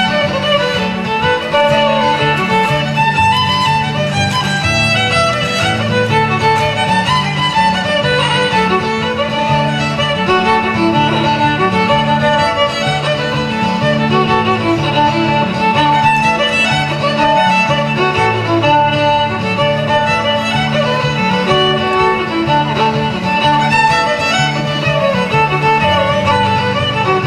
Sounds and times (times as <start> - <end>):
Violin, fiddle: 0.0 - 27.2.